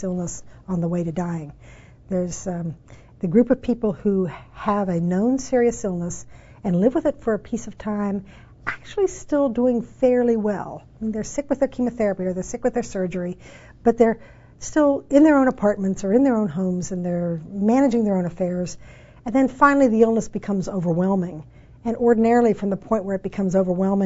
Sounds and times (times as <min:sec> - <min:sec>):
Female speech, woman speaking: 0:00.0 - 0:24.0.